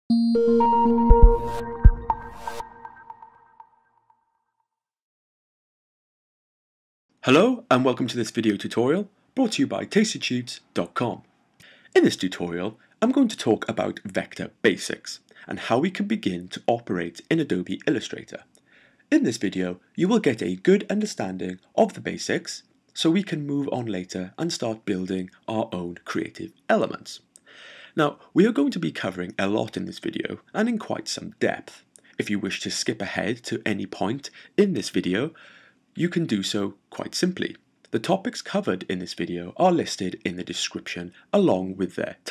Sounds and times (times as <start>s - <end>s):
Synthesizer: 0.1s - 4.0s.